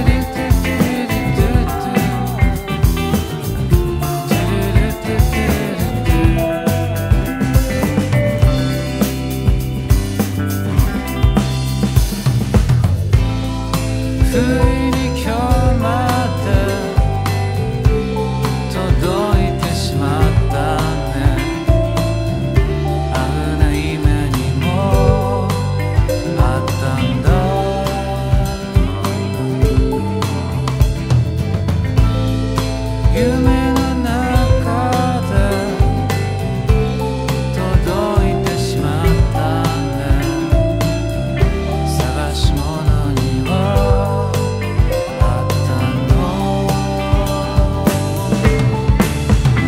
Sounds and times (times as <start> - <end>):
Bass drum: 0.0 - 49.6.